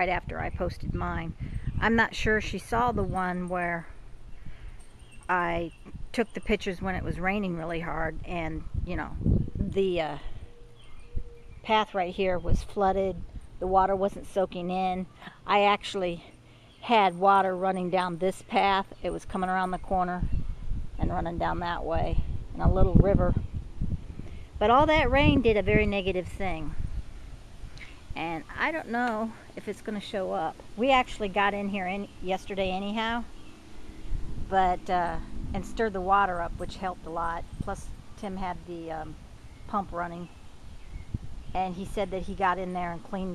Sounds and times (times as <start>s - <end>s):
Speech: 0.0s - 3.9s, 5.3s - 10.3s, 11.7s - 20.3s, 21.0s - 23.4s, 24.6s - 26.8s, 28.2s - 33.3s, 34.5s - 40.3s, 41.6s - 43.3s.